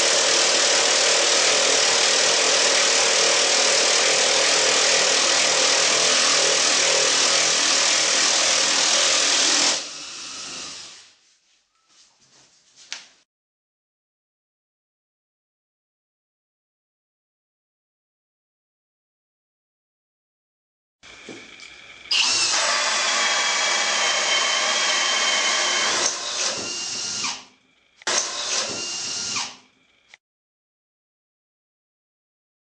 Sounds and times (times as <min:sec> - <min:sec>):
Drill: 0:00.0 - 0:11.2, 0:22.0 - 0:30.2.